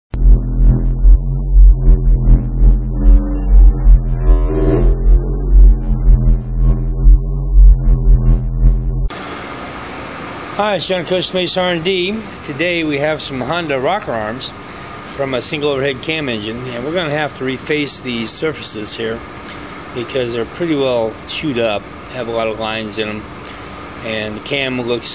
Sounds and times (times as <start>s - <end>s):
Didgeridoo: 0.1s - 9.1s.